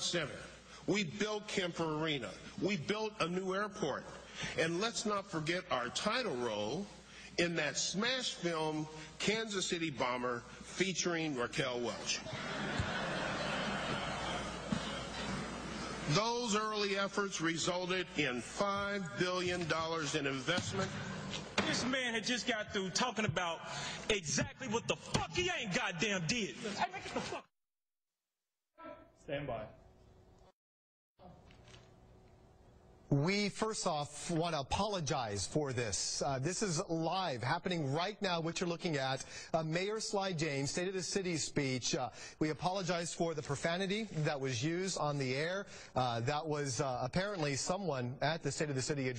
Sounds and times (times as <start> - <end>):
Male speech, man speaking: 0.0 - 12.2, 16.1 - 20.9, 21.6 - 27.5, 28.9 - 29.8, 33.1 - 49.1
Narration, monologue: 0.0 - 12.5, 15.7 - 27.6, 28.8 - 30.6, 31.2 - 49.1.